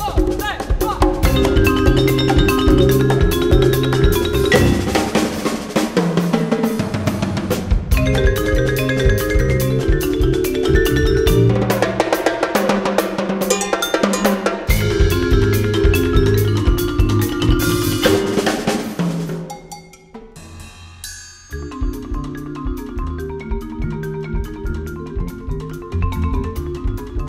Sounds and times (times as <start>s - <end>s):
Drum kit: 0.0s - 27.2s
Marimba, xylophone: 1.0s - 5.6s, 8.0s - 27.2s.